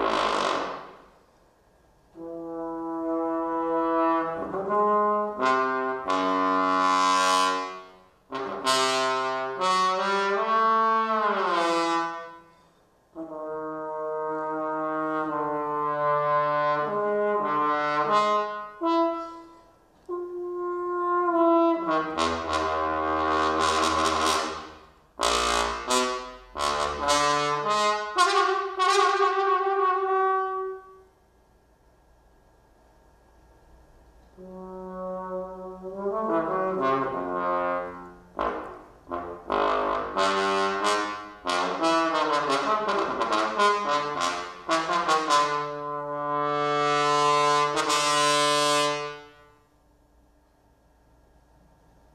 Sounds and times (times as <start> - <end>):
Trombone: 0.0 - 1.1, 2.1 - 12.5, 13.1 - 31.1, 34.4 - 49.6.